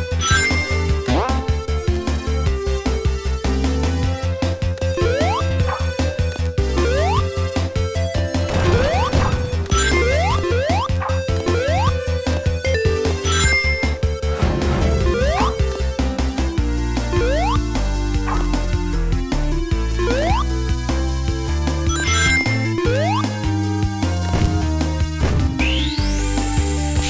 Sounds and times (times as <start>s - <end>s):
Music: 0.0s - 27.1s.